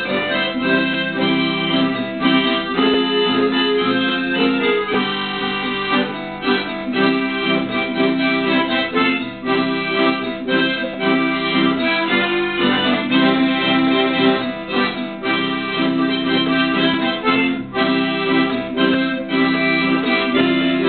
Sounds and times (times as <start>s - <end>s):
Acoustic guitar: 0.0s - 20.8s.